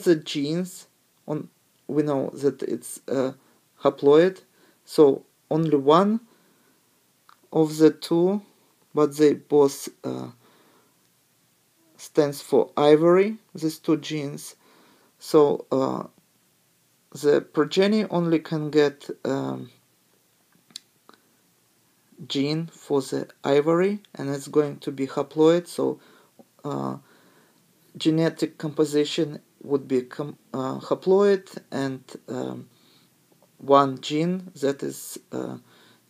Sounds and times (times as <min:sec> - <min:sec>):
Speech: 0:00.0 - 0:06.3, 0:07.3 - 0:10.4, 0:12.0 - 0:14.6, 0:15.2 - 0:16.2, 0:17.1 - 0:19.8, 0:22.2 - 0:26.0, 0:26.6 - 0:27.1, 0:27.9 - 0:32.7, 0:33.6 - 0:35.7.